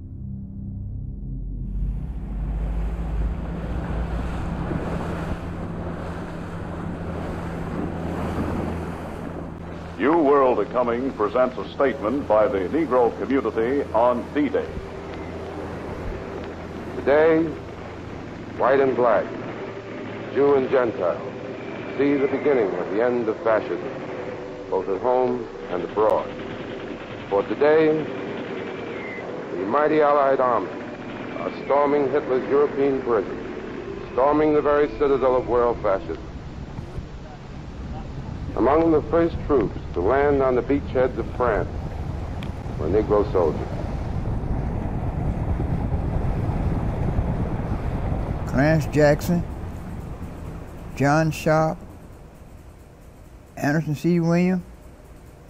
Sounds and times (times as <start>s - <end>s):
Outside, rural or natural: 0.0s - 55.5s
Speech: 10.0s - 14.8s, 17.0s - 17.6s, 18.6s - 19.3s, 20.3s - 21.3s, 22.0s - 23.9s, 24.7s - 26.3s, 27.3s - 28.1s, 29.6s - 30.8s, 31.4s - 33.4s, 34.2s - 36.3s, 37.9s - 41.7s, 42.8s - 43.8s, 48.5s - 49.5s, 51.0s - 51.8s, 53.6s - 54.6s.